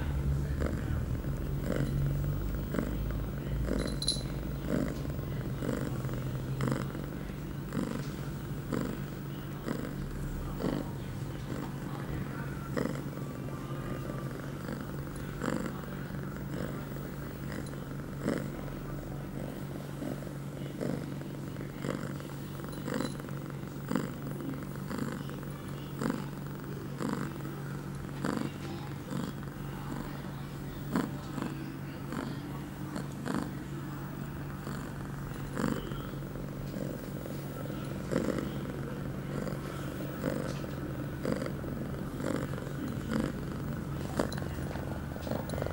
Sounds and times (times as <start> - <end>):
Purr: 0.0 - 45.7.